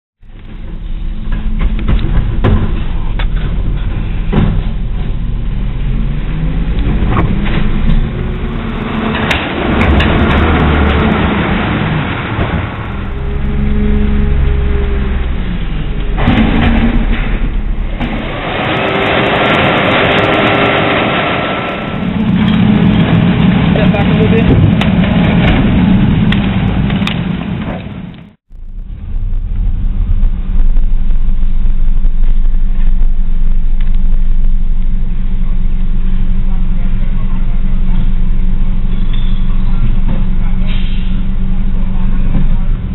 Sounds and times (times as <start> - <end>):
Outside, urban or manmade: 0.2 - 42.9
Truck: 0.2 - 42.9.